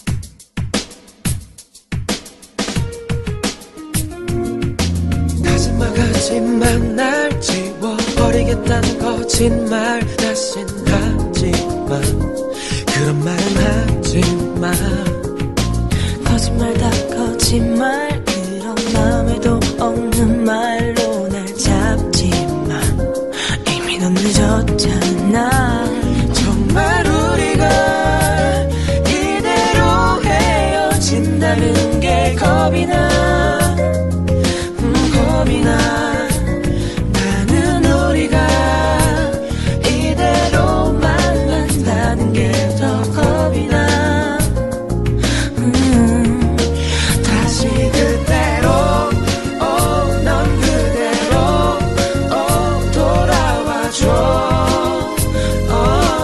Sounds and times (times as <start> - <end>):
Jazz: 0.0 - 56.2
Rhythm and blues: 0.0 - 56.2.